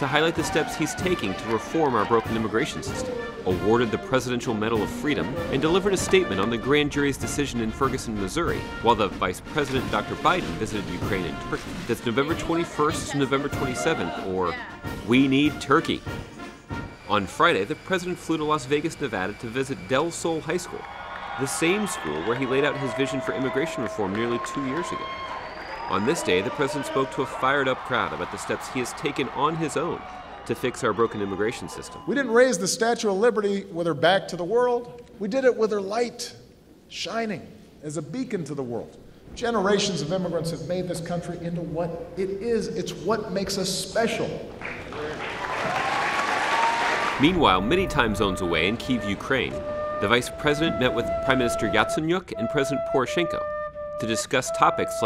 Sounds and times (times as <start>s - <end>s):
Speech: 0.0s - 16.0s, 21.4s - 25.0s, 25.9s - 44.4s, 47.2s - 53.4s, 54.0s - 55.0s.